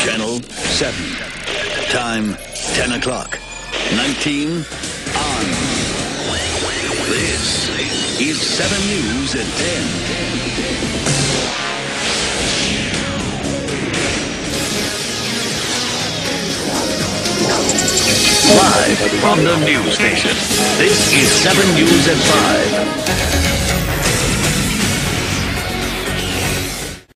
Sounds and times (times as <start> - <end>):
Exciting music: 0.6 - 27.1.